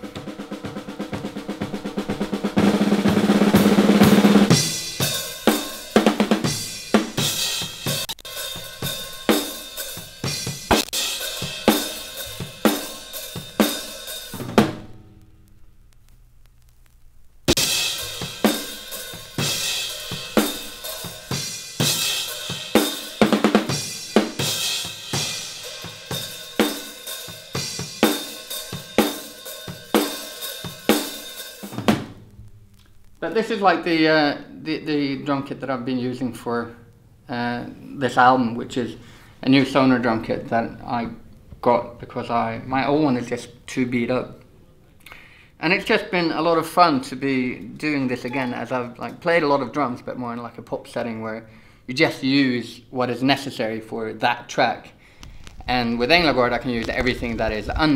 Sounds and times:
Bass drum: 0:00.0 - 0:15.4
Drum roll: 0:00.0 - 0:15.4, 0:17.5 - 0:32.5, 0:55.6 - 0:57.9
Drum kit: 0:00.0 - 0:15.6, 0:17.4 - 0:34.4, 0:55.3 - 0:57.9.

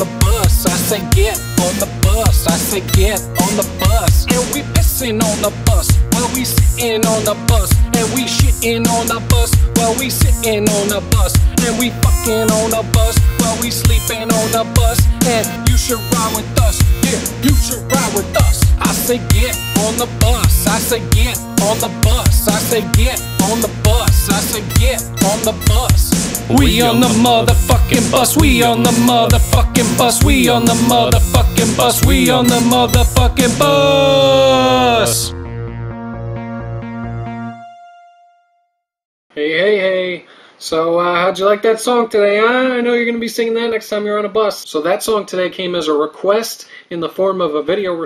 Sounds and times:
Music: 0:00.0 - 0:39.0.

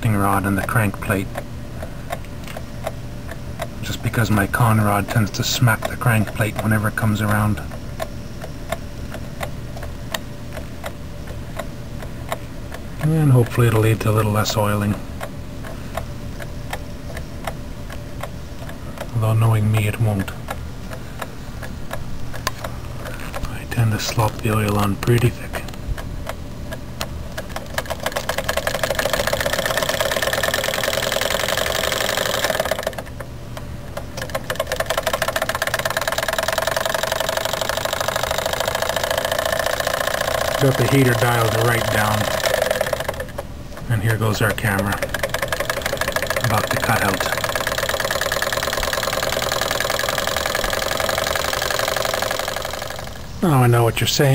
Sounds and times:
Speech: 0:00.0 - 0:01.3, 0:03.8 - 0:07.7, 0:13.0 - 0:15.0, 0:19.1 - 0:20.4, 0:23.4 - 0:25.7, 0:40.6 - 0:42.4, 0:43.9 - 0:45.0, 0:46.4 - 0:47.4, 0:53.4 - 0:54.3
Engine: 0:27.4 - 0:33.3, 0:34.2 - 0:53.6.

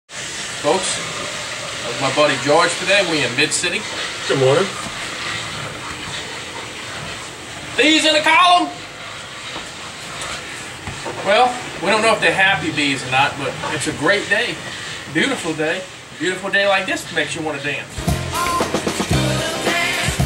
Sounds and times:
Speech: 0:00.6 - 0:01.0, 0:01.8 - 0:04.8, 0:07.8 - 0:08.8, 0:11.2 - 0:17.9.

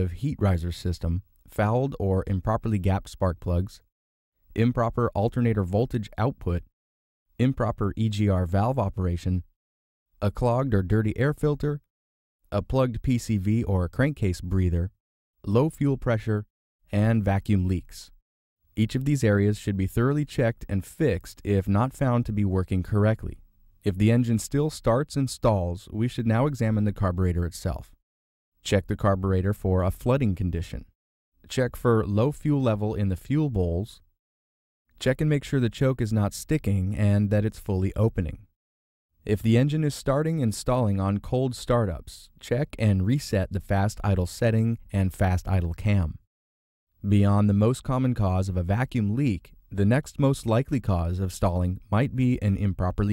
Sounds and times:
Speech: 0:00.0 - 0:03.9, 0:04.5 - 0:06.7, 0:07.4 - 0:09.6, 0:10.2 - 0:11.9, 0:12.5 - 0:18.2, 0:18.8 - 0:28.0, 0:28.6 - 0:34.1, 0:35.0 - 0:38.5, 0:39.2 - 0:46.3, 0:47.0 - 0:53.1.

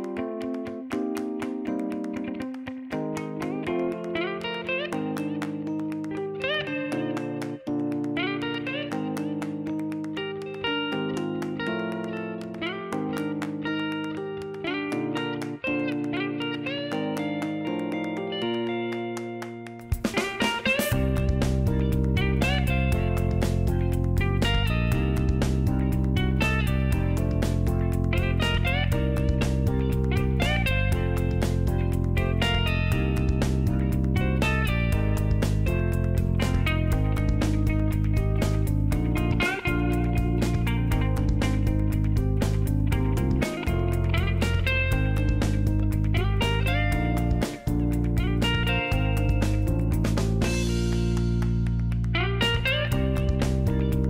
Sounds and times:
Music: 0:00.0 - 0:54.0.

